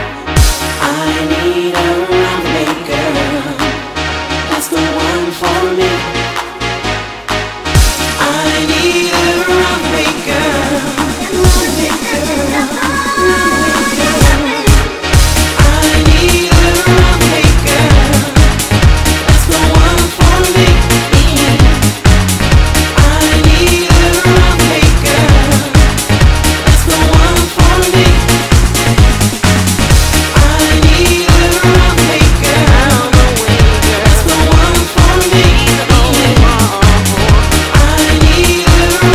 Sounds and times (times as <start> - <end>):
Music: 0.0 - 39.1.